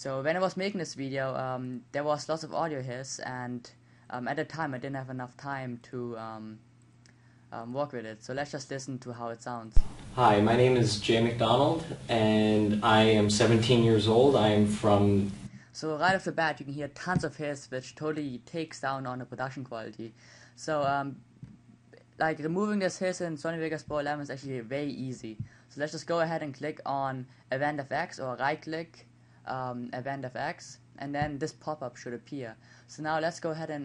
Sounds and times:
Speech: 0.0 - 6.6, 7.6 - 21.2, 22.0 - 33.8.

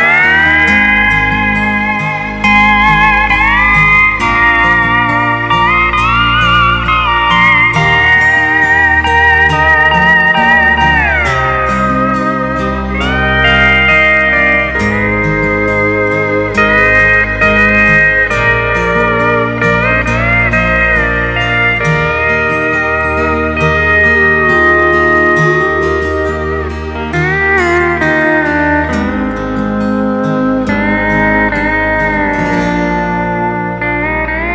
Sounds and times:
Steel guitar, slide guitar: 0.0 - 34.5.

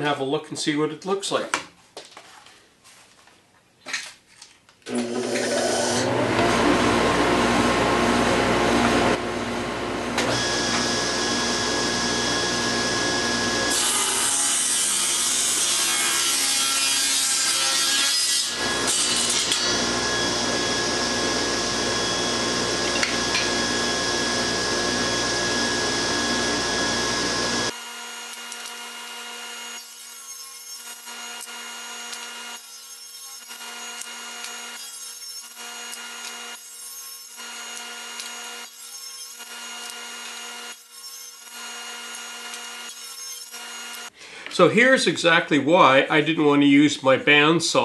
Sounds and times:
Sawing: 4.9 - 6.5, 10.2 - 44.2.

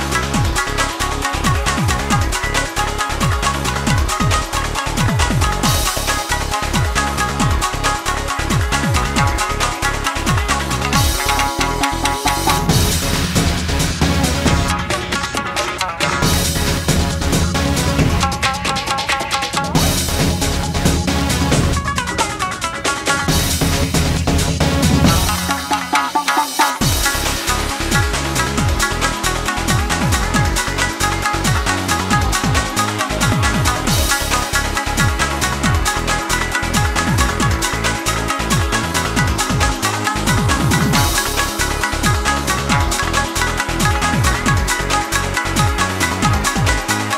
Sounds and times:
Video game music: 0.0 - 15.2, 19.7 - 47.1
Soundtrack music: 0.0 - 47.1.

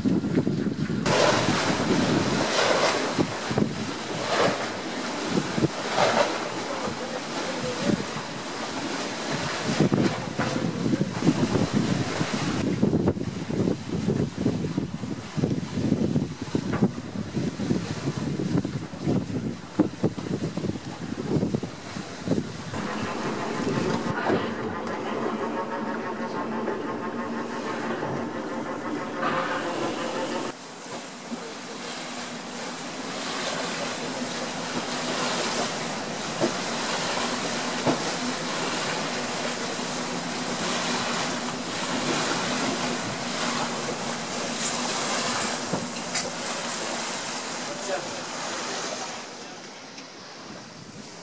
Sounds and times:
Boat, Water vehicle: 0.0 - 51.2.

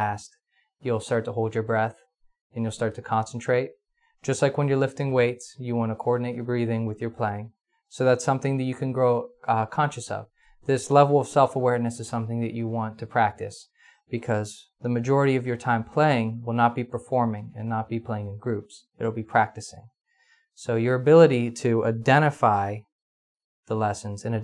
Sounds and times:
Speech: 0.0 - 2.0, 2.6 - 19.9, 20.6 - 22.9, 23.7 - 24.4.

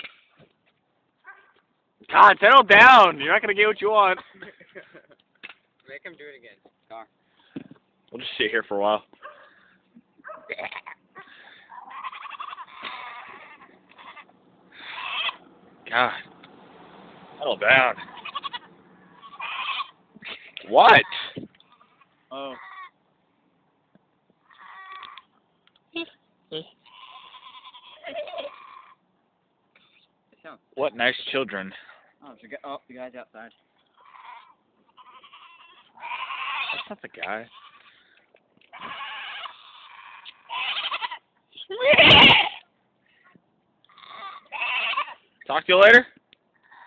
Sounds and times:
Domestic animals, pets: 9.2 - 15.4, 18.0 - 20.0, 21.6 - 23.0, 24.5 - 25.3, 26.8 - 29.0, 33.9 - 36.9, 37.5 - 41.2, 43.2 - 45.3, 46.6 - 46.8
Bleat: 10.3 - 15.4, 17.9 - 20.0, 21.0 - 23.0, 24.4 - 25.3, 26.8 - 29.0, 33.9 - 42.7, 43.9 - 45.3, 46.6 - 46.8.

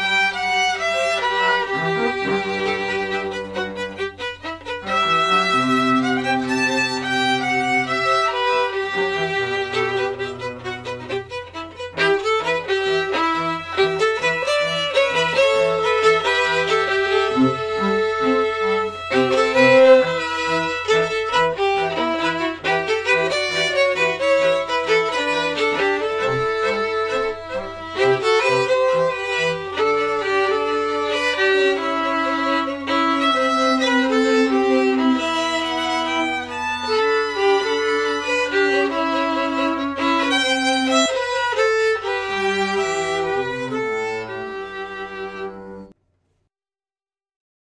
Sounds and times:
Cello: 0.0 - 46.0
Orchestra: 0.0 - 46.0
Violin, fiddle: 0.0 - 46.0.

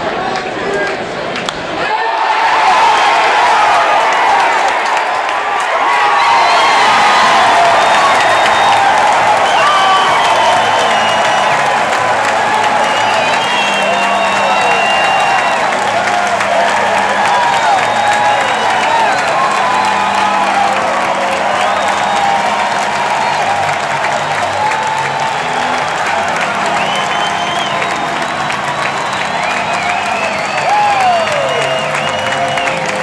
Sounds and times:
Music: 6.5 - 33.0.

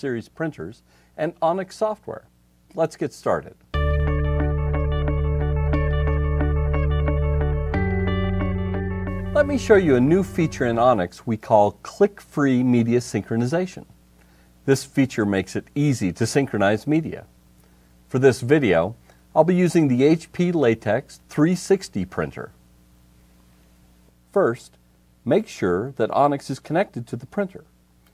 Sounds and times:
Speech: 0.0 - 3.6, 9.4 - 13.9, 14.7 - 17.3, 18.1 - 22.6, 24.3 - 27.7.

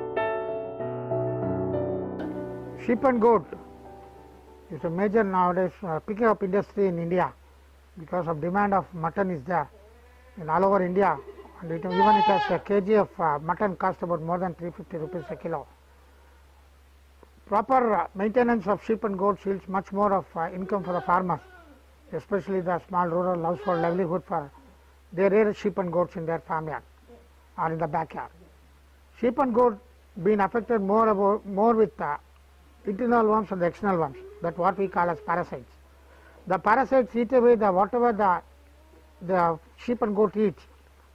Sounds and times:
Speech: 2.8 - 3.6, 4.7 - 7.4, 8.0 - 9.8, 10.4 - 15.7, 17.4 - 21.5, 22.1 - 24.6, 25.2 - 28.4, 29.2 - 32.2, 32.8 - 35.8, 36.5 - 38.4, 39.2 - 40.7
Bleat: 9.7 - 12.7, 14.9 - 15.6, 20.4 - 21.8, 23.3 - 24.2, 33.9 - 35.6, 38.5 - 39.5.

